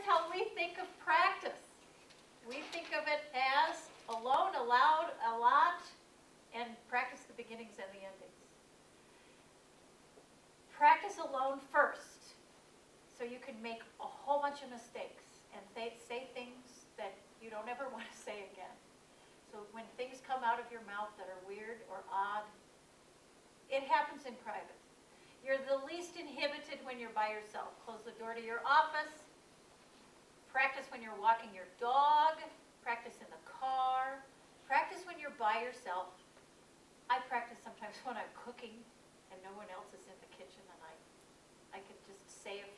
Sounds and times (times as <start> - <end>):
Female speech, woman speaking: 0.0 - 1.7, 2.5 - 6.0, 6.6 - 8.3, 10.8 - 12.4, 13.2 - 18.8, 19.6 - 22.6, 23.7 - 24.8, 25.5 - 29.3, 30.6 - 36.2, 37.1 - 41.0, 41.8 - 42.7.